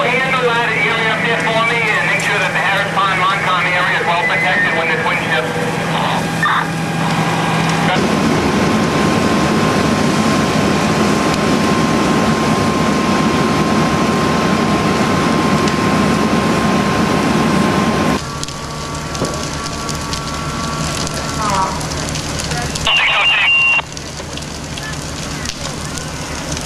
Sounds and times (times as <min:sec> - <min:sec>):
Speech: 0:00.0 - 0:06.7, 0:21.4 - 0:23.8, 0:24.9 - 0:26.6.